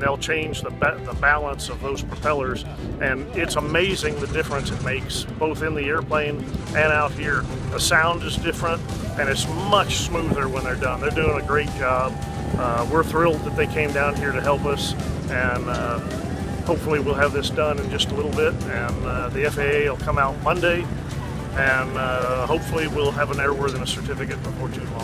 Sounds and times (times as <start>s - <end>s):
Speech: 0.0s - 16.1s, 16.7s - 20.9s, 21.6s - 25.0s
Music: 0.0s - 25.0s
Propeller, airscrew: 5.7s - 7.8s, 14.9s - 22.0s.